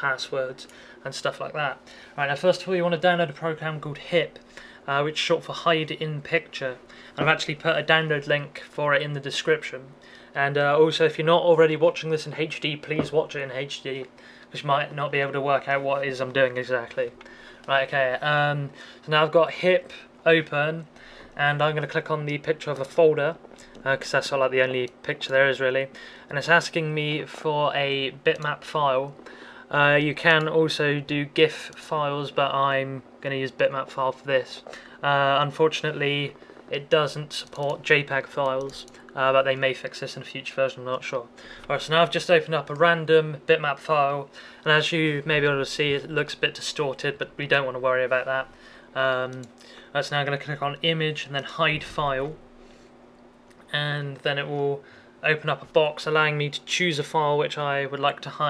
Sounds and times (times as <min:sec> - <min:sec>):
Speech: 0:00.0 - 0:52.4, 0:53.7 - 0:58.5.